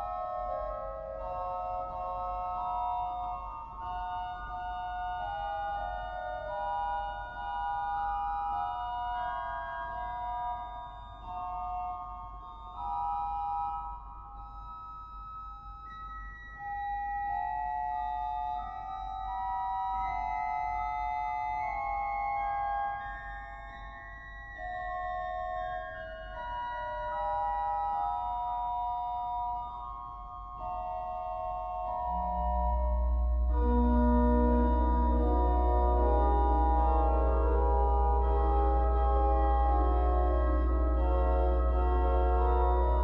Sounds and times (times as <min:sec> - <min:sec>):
Organ: 0:32.5 - 0:43.0.